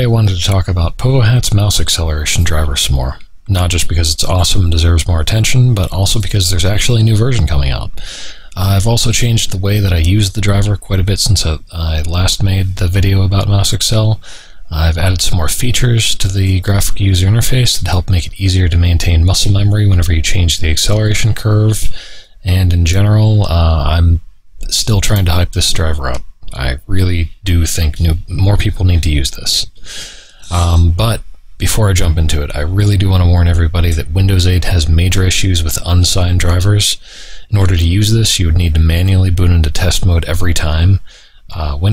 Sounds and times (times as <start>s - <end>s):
Speech: 0.0s - 29.8s, 30.4s - 41.9s.